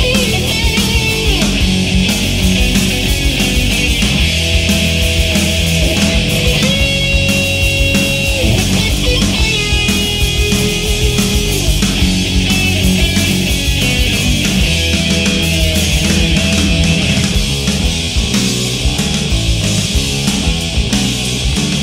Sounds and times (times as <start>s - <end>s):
Progressive rock: 0.0s - 21.8s.